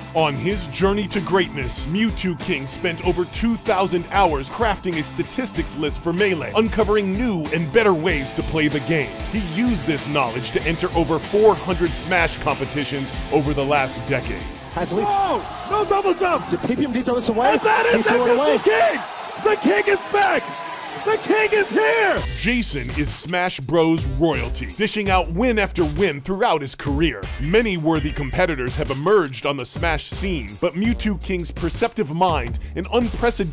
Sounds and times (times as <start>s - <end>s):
Music: 0.0s - 33.5s
Speech: 0.1s - 20.4s, 21.0s - 33.5s.